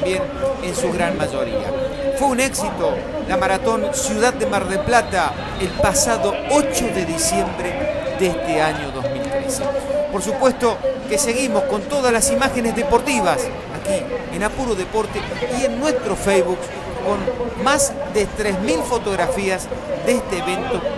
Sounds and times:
Crowd: 0.0 - 20.9
Speech: 0.0 - 20.9.

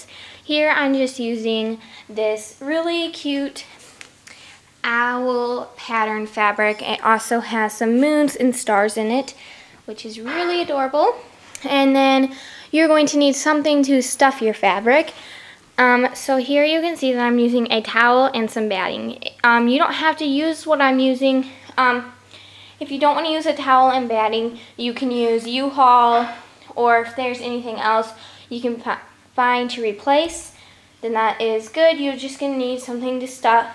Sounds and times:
Speech: 0.0 - 3.7, 4.8 - 15.2, 15.8 - 22.2, 22.8 - 33.7.

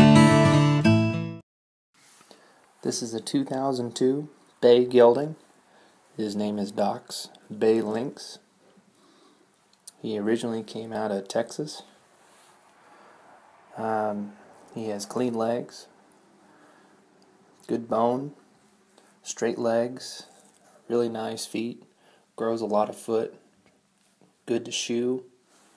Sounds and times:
Speech: 2.8 - 5.4, 6.2 - 8.5, 9.9 - 12.0, 13.8 - 15.9, 17.6 - 18.4, 19.2 - 23.4, 24.4 - 25.4.

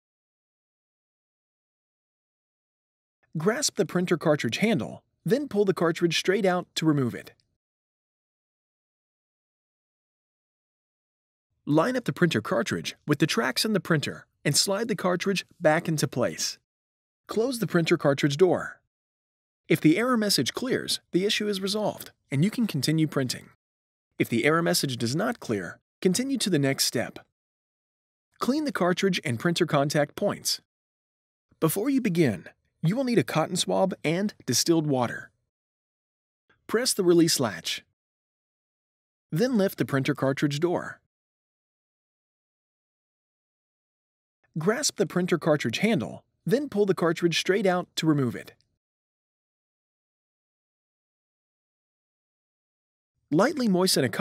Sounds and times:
Speech: 3.4 - 7.4, 11.7 - 16.6, 17.3 - 18.8, 19.7 - 23.6, 24.2 - 27.3, 28.4 - 30.7, 31.6 - 35.4, 36.7 - 37.9, 39.4 - 41.1, 44.6 - 48.6, 53.4 - 54.2.

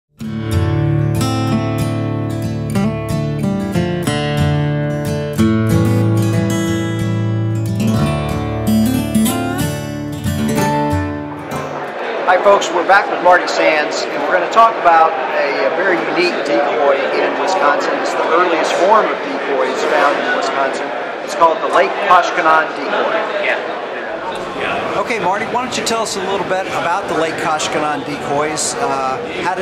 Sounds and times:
Acoustic guitar: 0.2 - 12.4.

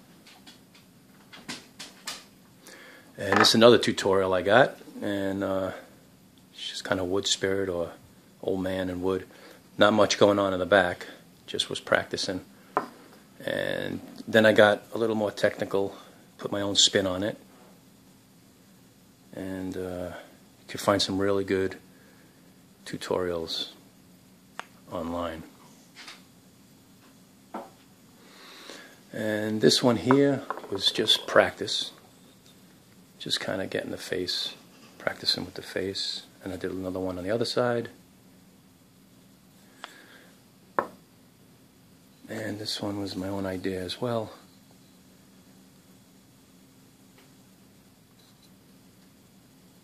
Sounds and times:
Speech: 3.2 - 5.9, 6.6 - 12.5, 13.4 - 17.4, 19.3 - 21.8, 22.8 - 23.8, 24.9 - 25.6, 29.1 - 32.0, 33.2 - 38.0, 42.3 - 44.4.

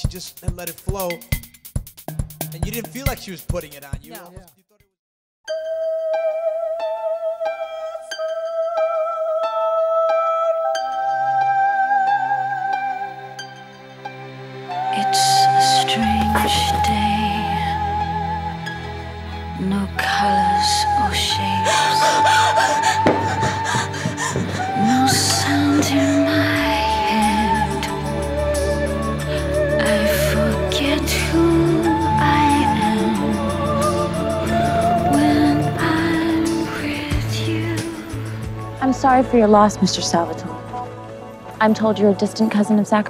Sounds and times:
Speech: 0.0 - 1.2, 2.5 - 4.9, 38.8 - 40.6, 41.6 - 43.0
Music: 0.0 - 43.0.

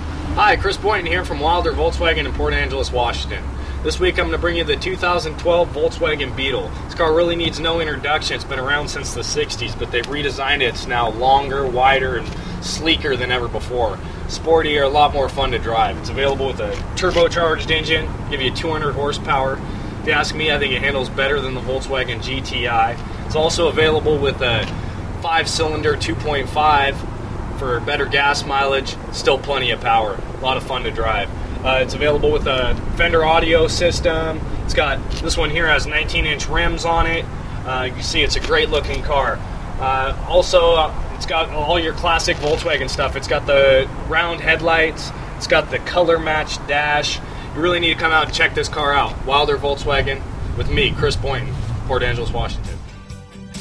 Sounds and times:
Speech: 0.4 - 27.0, 27.6 - 52.8.

